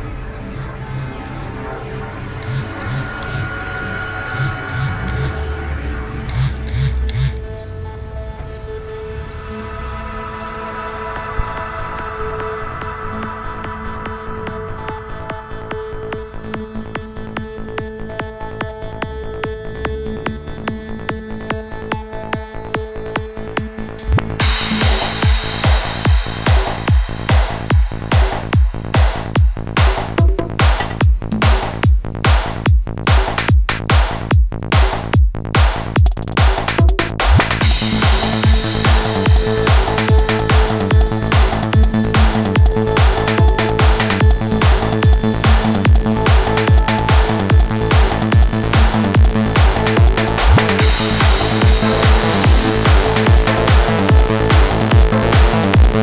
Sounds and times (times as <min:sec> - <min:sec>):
Music: 0:00.0 - 0:56.0.